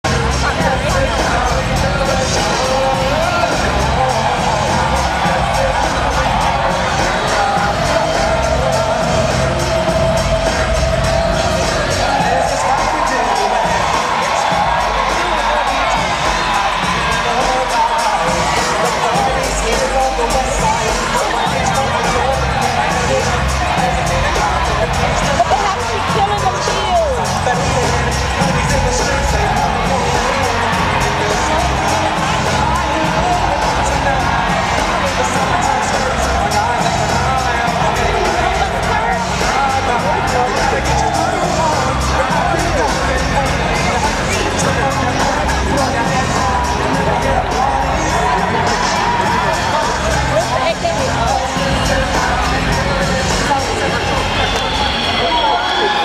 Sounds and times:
Music: 0:00.0 - 0:56.0
Singing: 0:00.0 - 0:56.0
Speech: 0:00.0 - 0:56.0.

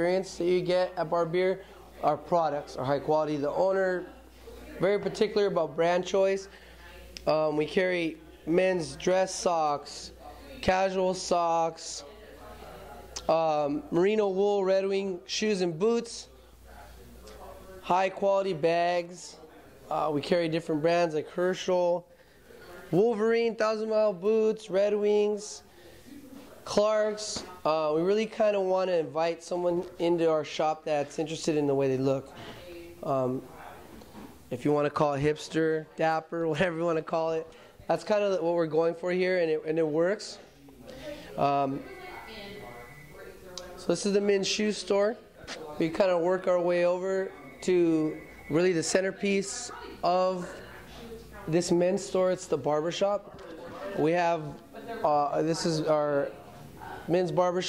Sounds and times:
Speech: 0:00.0 - 0:57.6.

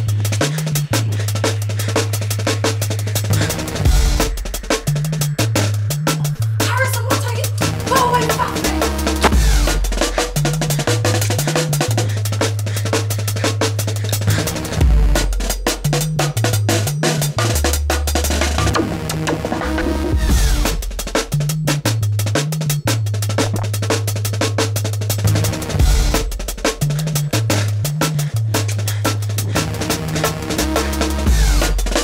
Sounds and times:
Music: 0:00.0 - 0:32.0.

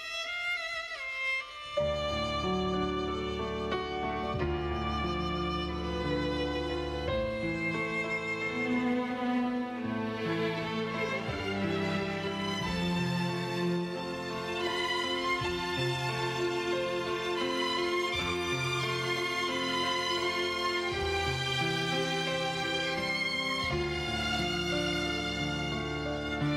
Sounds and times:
Tender music: 0:00.2 - 0:26.5.

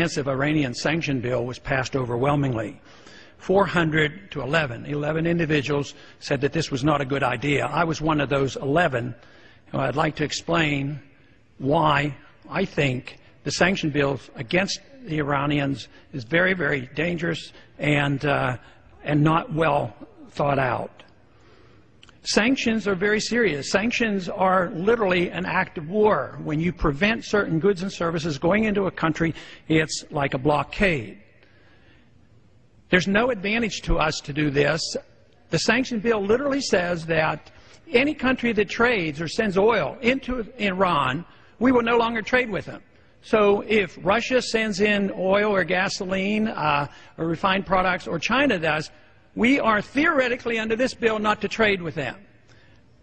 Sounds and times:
Male speech, man speaking: 0:00.0 - 0:02.8, 0:03.4 - 0:11.0, 0:11.6 - 0:21.1, 0:22.2 - 0:31.2, 0:32.9 - 0:52.2
Narration, monologue: 0:00.0 - 0:53.0.

